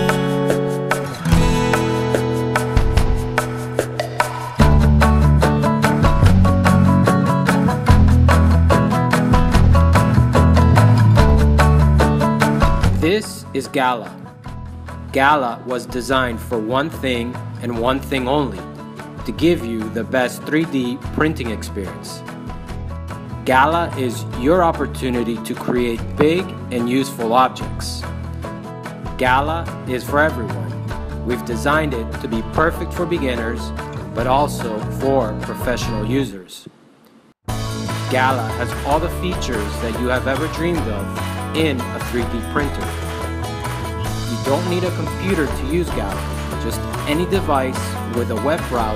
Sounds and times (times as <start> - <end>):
Music: 0.0 - 36.4, 37.5 - 48.9
Speech: 13.0 - 14.2, 15.1 - 22.2, 23.5 - 28.1, 29.2 - 36.7, 38.1 - 43.0, 44.3 - 48.9.